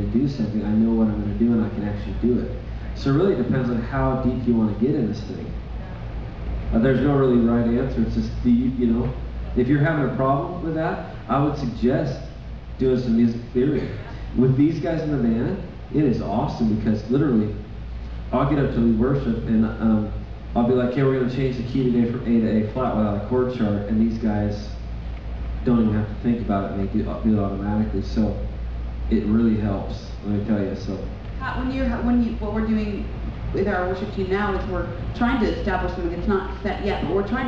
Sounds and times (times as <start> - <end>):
Speech: 0.0 - 6.0, 6.7 - 17.6, 18.3 - 24.8, 25.6 - 28.5, 29.1 - 37.4.